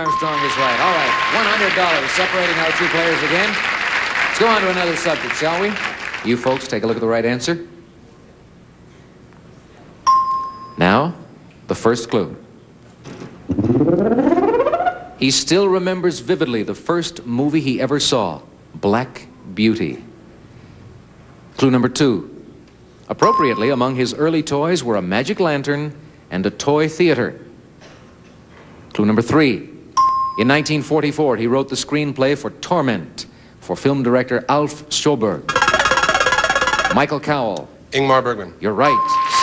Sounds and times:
Speech: 0:00.0 - 0:03.6, 0:04.4 - 0:07.8, 0:10.8 - 0:12.5, 0:15.2 - 0:20.1, 0:21.6 - 0:22.4, 0:23.1 - 0:27.5, 0:28.9 - 0:29.8, 0:30.4 - 0:35.5, 0:37.0 - 0:39.4.

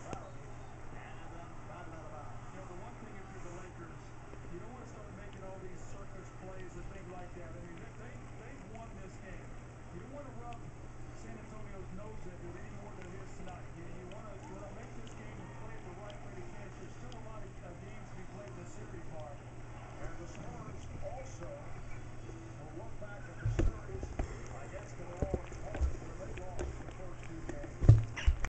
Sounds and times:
Speech: 0:00.0 - 0:27.9.

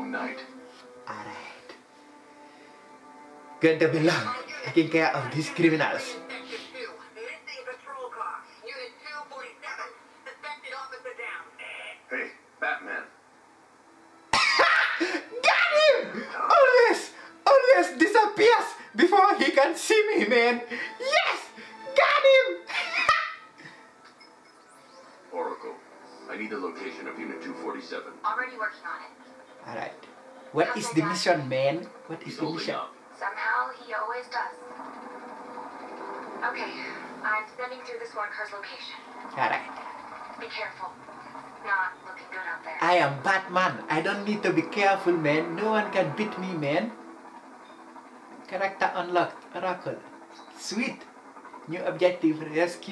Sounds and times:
Music: 0:00.0 - 0:52.9.

